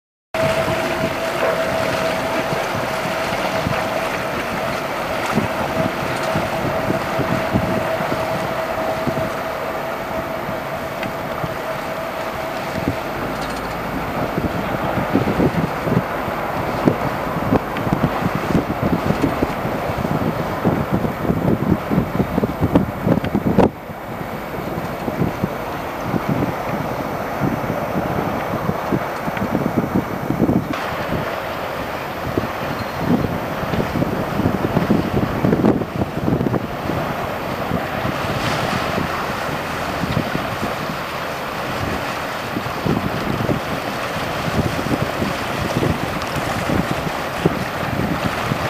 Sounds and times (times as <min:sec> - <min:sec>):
Sailboat, sailing ship: 0:00.4 - 0:48.6
Ship: 0:00.4 - 0:48.6.